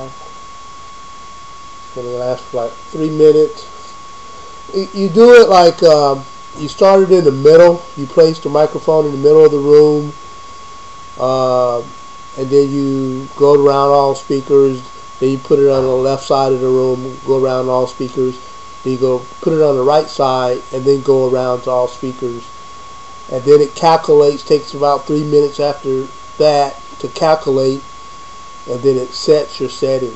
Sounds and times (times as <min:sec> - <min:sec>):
Speech: 0:00.0 - 0:00.2, 0:02.0 - 0:03.8, 0:04.7 - 0:10.2, 0:11.2 - 0:22.5, 0:23.3 - 0:27.9, 0:28.7 - 0:30.1.